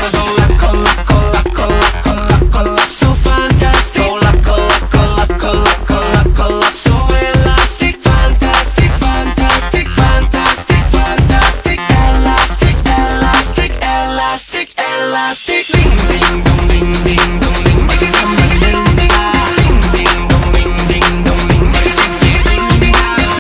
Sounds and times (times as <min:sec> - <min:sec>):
Music: 0:00.0 - 0:23.4.